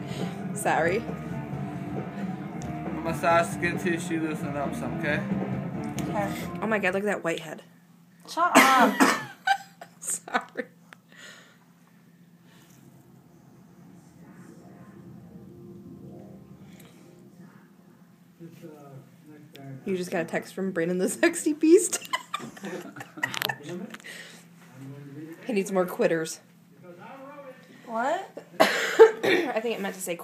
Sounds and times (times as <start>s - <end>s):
Music: 0.0s - 7.1s, 12.8s - 19.0s
Inside, small room: 0.0s - 30.2s.